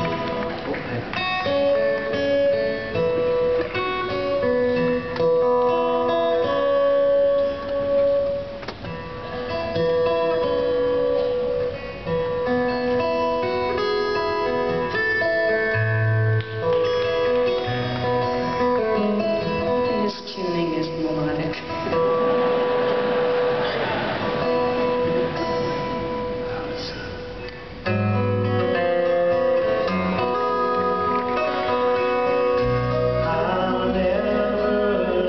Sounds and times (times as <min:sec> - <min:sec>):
Music: 0:00.0 - 0:35.2.